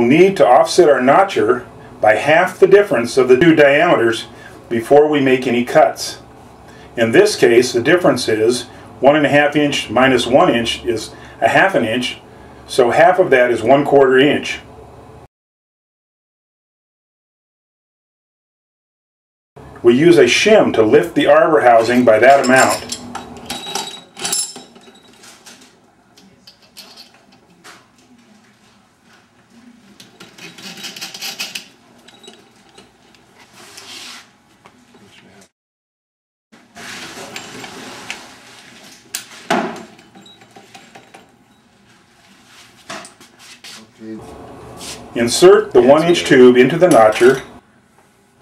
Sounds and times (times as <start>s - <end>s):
Speech: 0.0s - 6.2s, 7.0s - 14.7s, 19.8s - 22.9s, 43.8s - 44.2s, 45.2s - 47.6s.